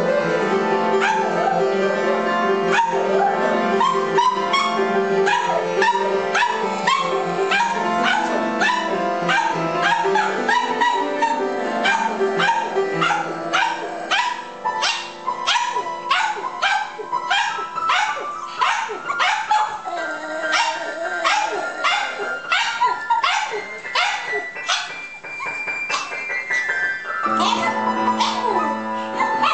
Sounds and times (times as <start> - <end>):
Music: 0.0 - 29.5
Dog: 1.0 - 1.6, 2.7 - 29.5.